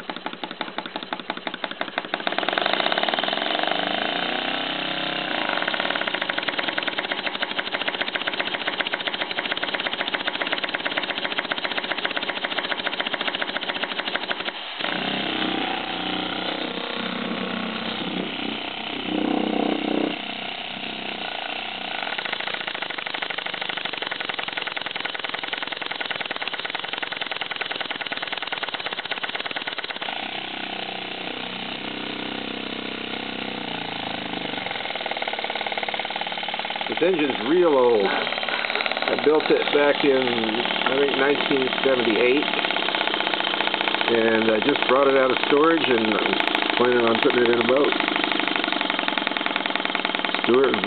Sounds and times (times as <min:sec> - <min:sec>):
Engine: 0:00.0 - 0:50.8.